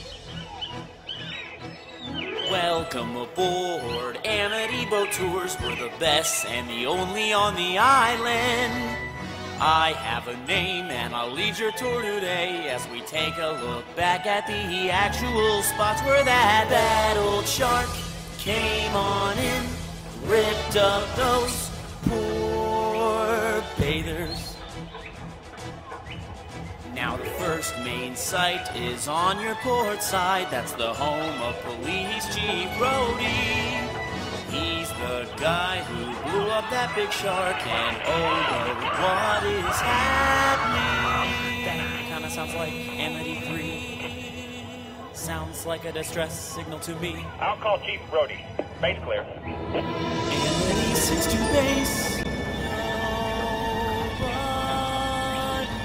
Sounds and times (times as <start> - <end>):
Music: 0.0 - 55.8.